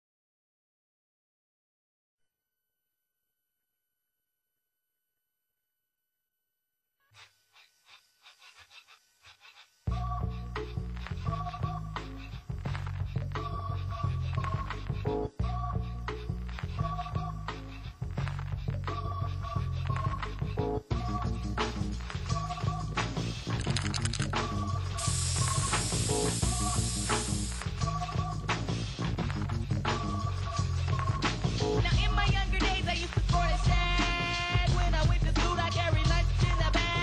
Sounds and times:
Music: 0:07.0 - 0:37.0.

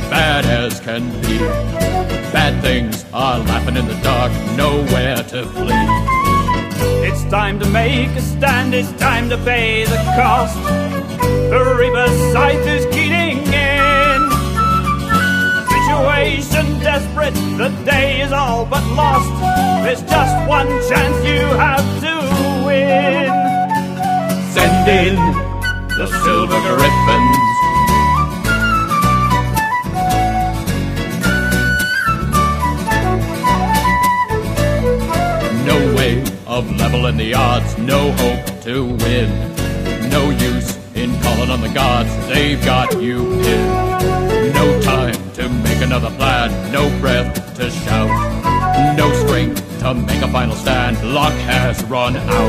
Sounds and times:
Music: 0:00.0 - 0:52.4.

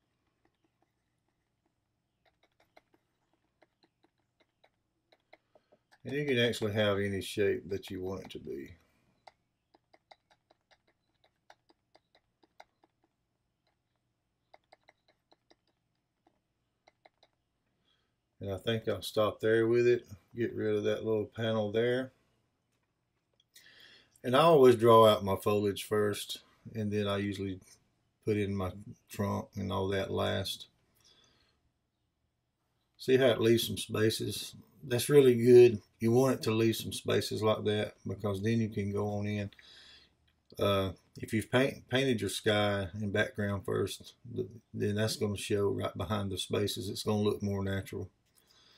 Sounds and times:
Inside, small room: 0:00.0 - 0:48.7
Speech: 0:06.0 - 0:08.8, 0:18.4 - 0:22.1, 0:24.2 - 0:30.7, 0:33.0 - 0:39.6, 0:40.6 - 0:48.1.

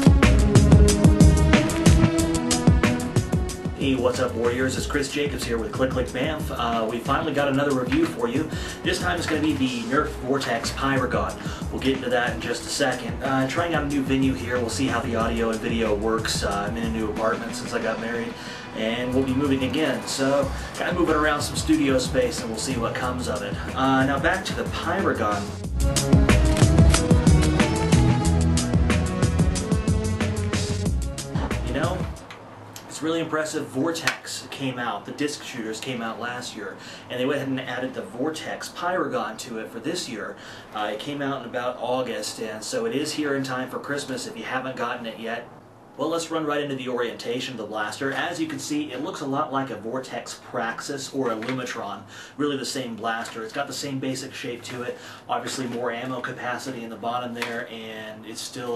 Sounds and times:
Music: 0:00.0 - 0:32.4
Speech: 0:03.8 - 0:25.6, 0:31.6 - 0:32.1, 0:32.9 - 0:58.7.

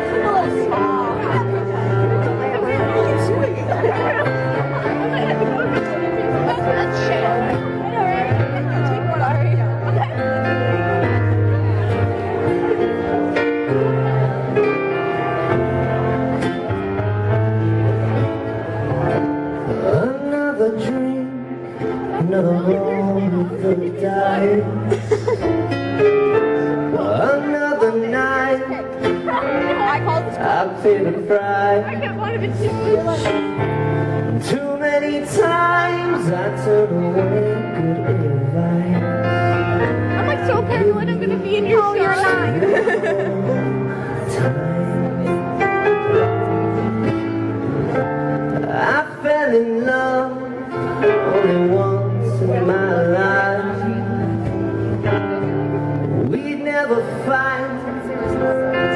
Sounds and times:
Music: 0:00.0 - 0:58.9.

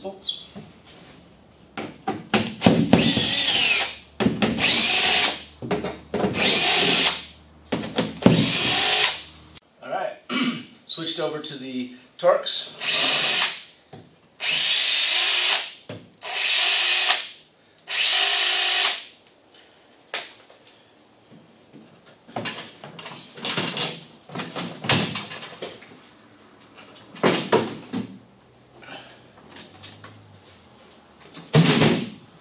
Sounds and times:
Speech: 0:09.8 - 0:10.3, 0:10.9 - 0:12.8.

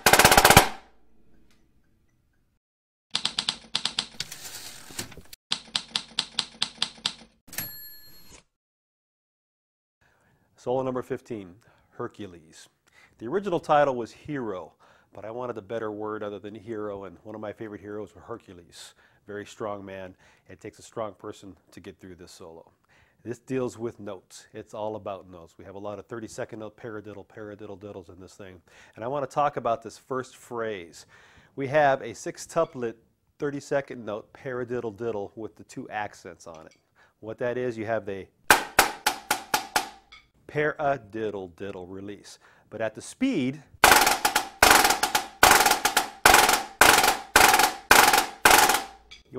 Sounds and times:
Speech: 0:10.6 - 0:38.4, 0:40.5 - 0:43.7.

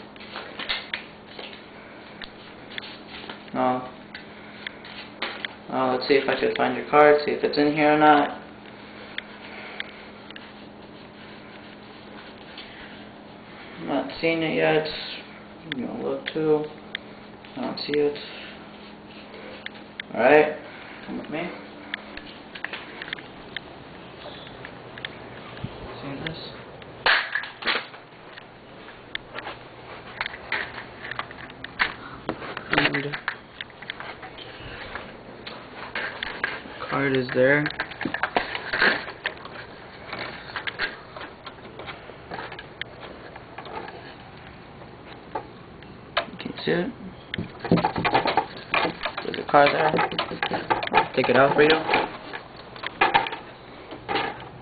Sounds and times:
Speech: 0:03.5 - 0:04.0, 0:05.7 - 0:08.4, 0:13.8 - 0:16.8, 0:17.6 - 0:18.4, 0:20.1 - 0:21.6, 0:26.0 - 0:26.6, 0:36.9 - 0:37.8, 0:46.4 - 0:47.0, 0:49.2 - 0:50.0, 0:51.1 - 0:52.0.

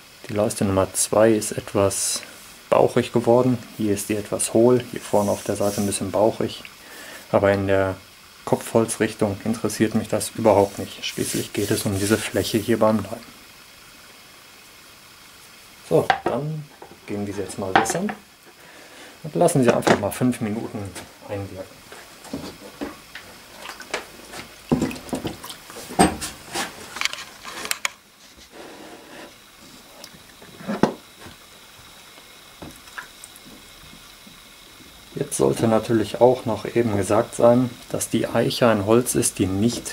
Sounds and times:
Rub: 0:04.9 - 0:06.1, 0:10.5 - 0:12.8, 0:25.7 - 0:30.8
Wood: 0:16.1 - 0:18.2, 0:30.5 - 0:31.0.

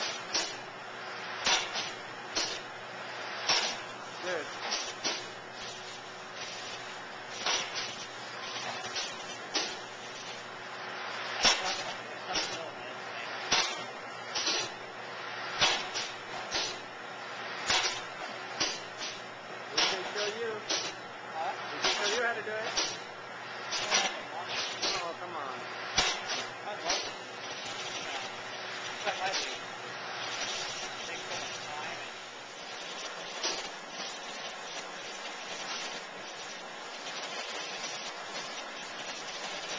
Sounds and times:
Speech: 0:04.2 - 0:04.6, 0:11.6 - 0:13.4, 0:19.7 - 0:20.7, 0:21.3 - 0:22.8, 0:23.8 - 0:25.7, 0:26.6 - 0:27.1, 0:29.0 - 0:29.6, 0:31.0 - 0:32.2.

